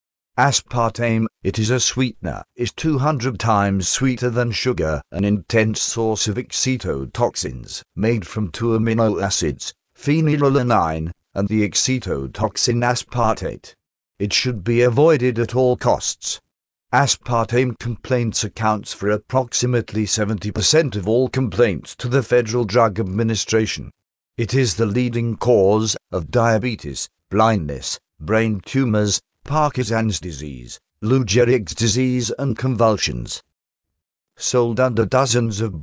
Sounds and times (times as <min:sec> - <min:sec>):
Speech: 0:00.4 - 0:33.5, 0:34.4 - 0:35.8.